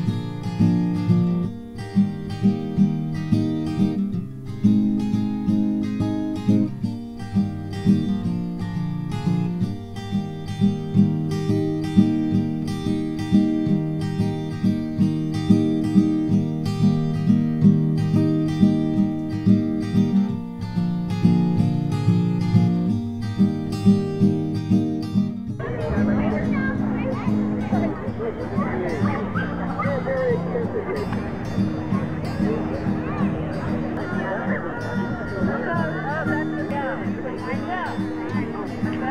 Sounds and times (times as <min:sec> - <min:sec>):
Music: 0:00.0 - 0:39.1
Speech: 0:25.6 - 0:39.1
Dog: 0:27.8 - 0:31.2.